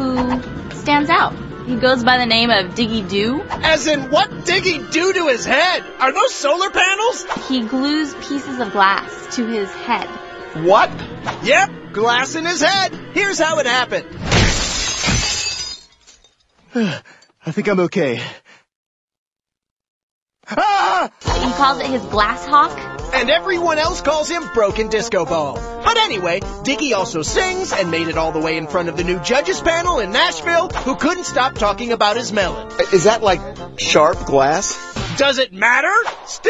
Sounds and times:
Music: 0:00.0 - 0:14.3, 0:21.2 - 0:36.5.

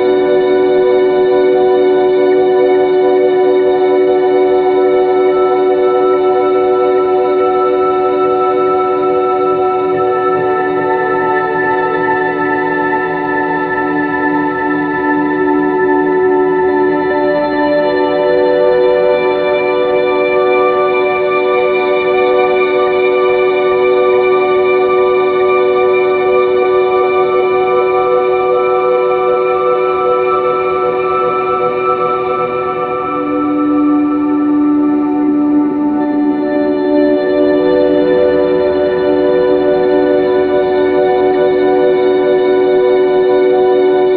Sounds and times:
Music: 0:00.0 - 0:44.1.

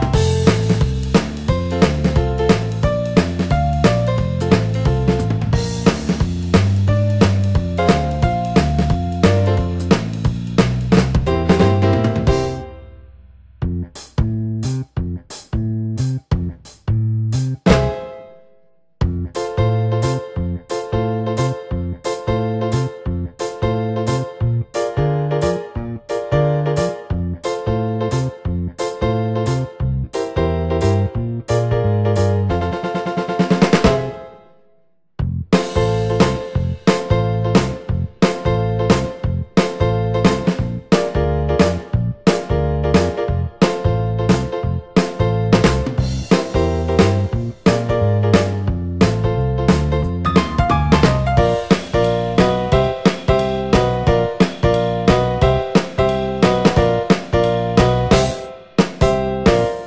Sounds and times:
Music: 0:00.0 - 0:59.8.

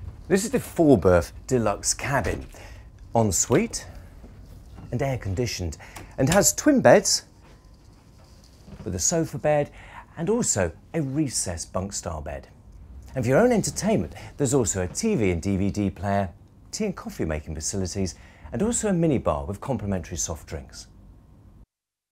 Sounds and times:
Speech: 0:00.3 - 0:02.5, 0:03.1 - 0:04.0, 0:04.9 - 0:07.3, 0:08.8 - 0:21.0.

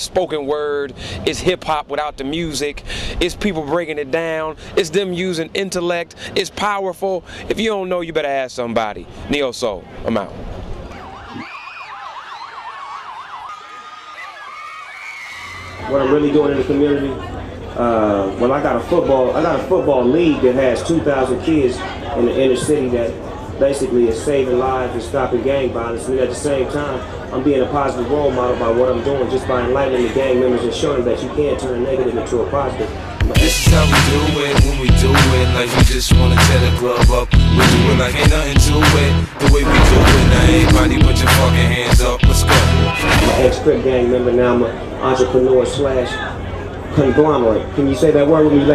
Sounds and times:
Speech: 0:00.0 - 0:10.4, 0:15.9 - 0:34.5, 0:43.2 - 0:48.7.

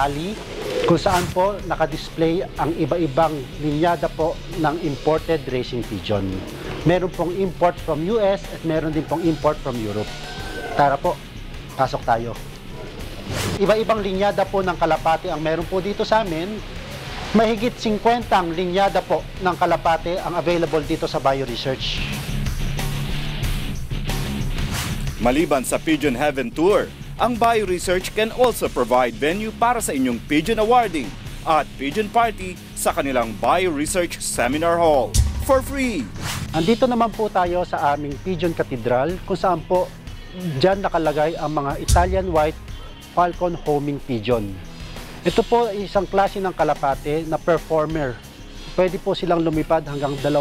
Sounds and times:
Speech: 0:00.0 - 0:10.2, 0:10.8 - 0:11.2, 0:11.8 - 0:12.4, 0:13.6 - 0:16.6, 0:17.3 - 0:22.2, 0:25.2 - 0:42.6, 0:43.2 - 0:44.6, 0:45.2 - 0:48.2, 0:48.8 - 0:50.4
Music: 0:00.0 - 0:50.4.

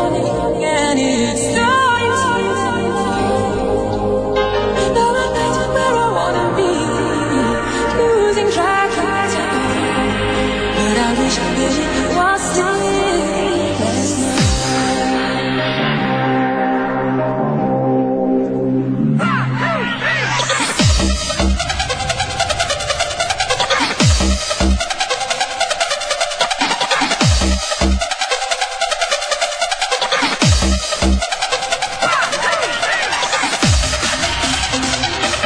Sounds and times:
Music: 0:00.0 - 0:35.4.

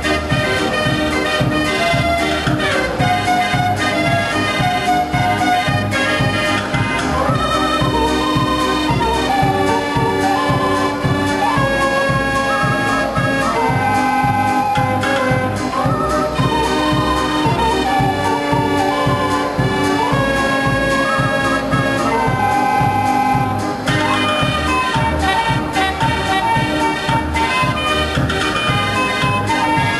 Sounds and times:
Hammond organ: 0:00.0 - 0:30.0.

